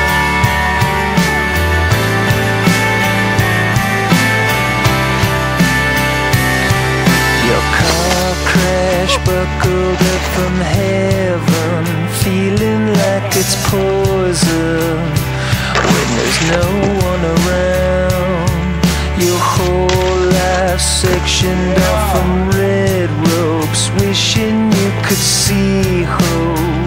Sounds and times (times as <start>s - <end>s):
Music: 0.0s - 26.8s.